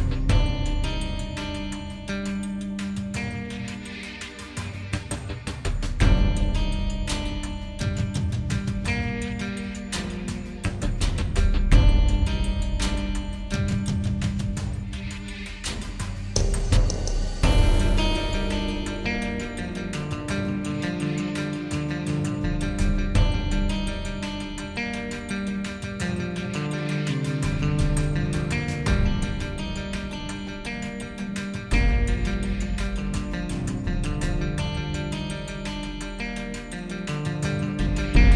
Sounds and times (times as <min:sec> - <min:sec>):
Music: 0:00.0 - 0:38.3.